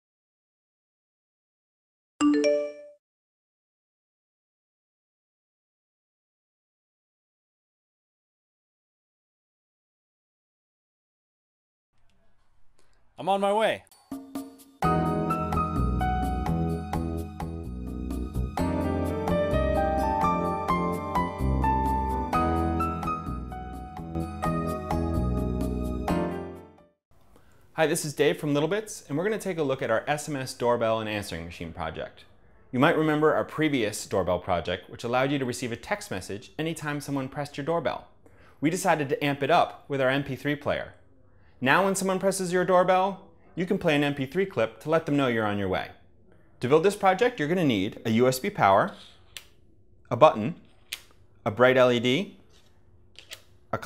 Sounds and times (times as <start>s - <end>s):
Speech: 13.2s - 13.9s, 27.8s - 41.0s, 41.6s - 46.0s, 46.6s - 49.1s, 50.1s - 50.7s, 51.5s - 52.4s
Music: 13.8s - 27.0s.